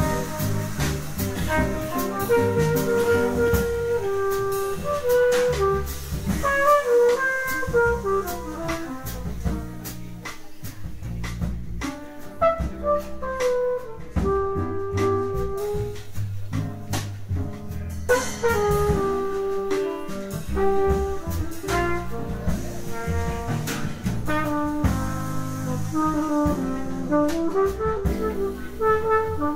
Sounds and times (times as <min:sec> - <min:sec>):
Inside, large room or hall: 0:00.0 - 0:29.5
Speech: 0:00.0 - 0:29.5.